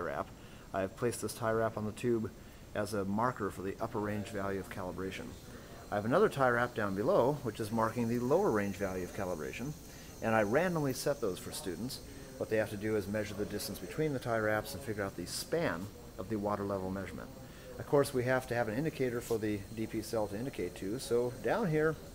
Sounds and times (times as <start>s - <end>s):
Speech: 0.0s - 22.1s.